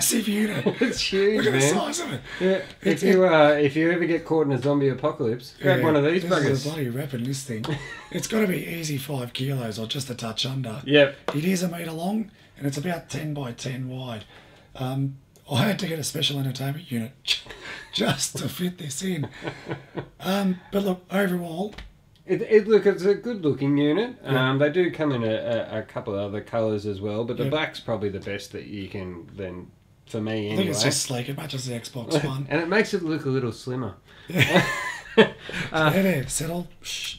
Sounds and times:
Speech: 0.0s - 17.4s, 20.2s - 34.0s.

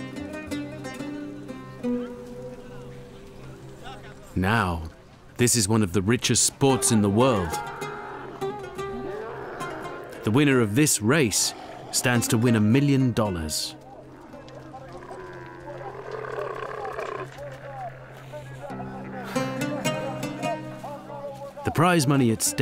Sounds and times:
Music: 0.0s - 4.2s, 6.7s - 10.3s, 11.9s - 14.7s, 18.6s - 22.6s
Speech: 3.8s - 7.6s, 10.2s - 13.8s, 17.4s - 22.6s.

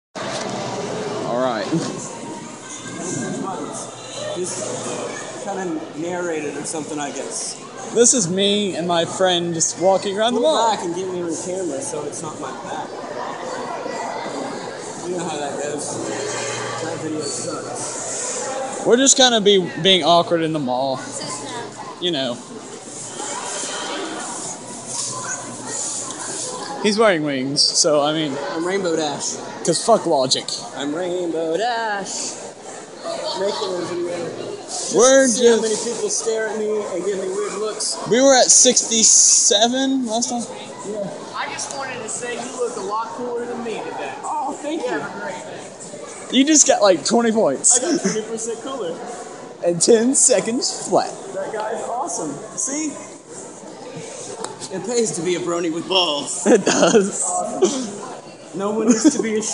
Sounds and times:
Inside, large room or hall: 0.2s - 59.5s
Male speech, man speaking: 1.3s - 2.0s, 3.0s - 13.0s, 15.0s - 17.8s, 18.8s - 21.3s, 22.0s - 22.5s, 26.8s - 32.4s, 33.1s - 45.6s, 46.3s - 53.1s, 54.6s - 57.9s, 58.6s - 59.5s.

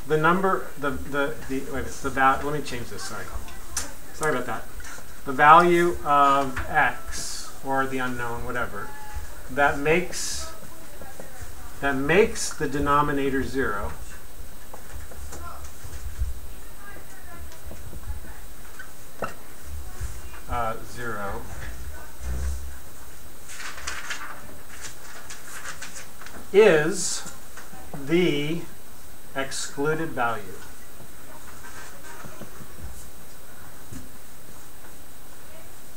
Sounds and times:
Inside, small room: 0.0s - 35.9s
Speech: 0.1s - 4.7s, 5.3s - 14.2s, 19.3s - 22.5s, 26.6s - 28.7s, 29.4s - 30.7s.

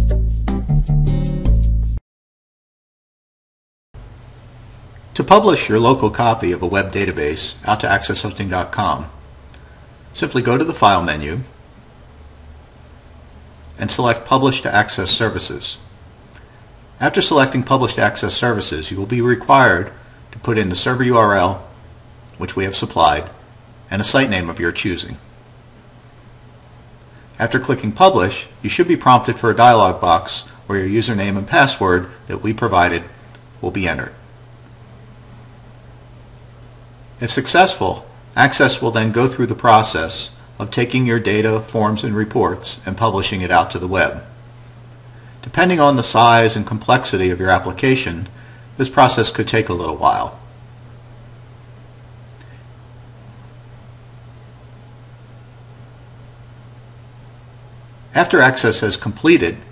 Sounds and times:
Speech: 5.1s - 9.2s, 10.1s - 11.6s, 13.8s - 15.9s, 17.0s - 21.8s, 22.4s - 25.3s, 27.4s - 34.2s, 37.2s - 44.4s, 45.4s - 50.4s, 58.1s - 59.7s.

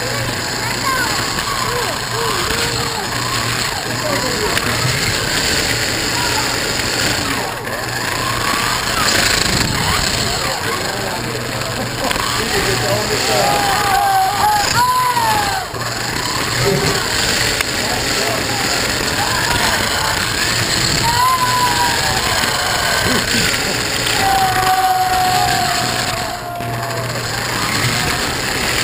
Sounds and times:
Speech: 9.7s - 14.0s.

